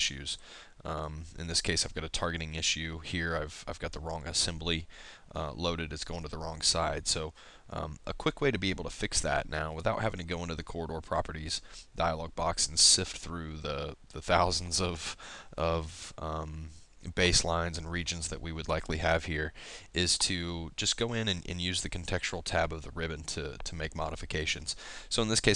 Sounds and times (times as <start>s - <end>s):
Speech: 0.0s - 25.5s.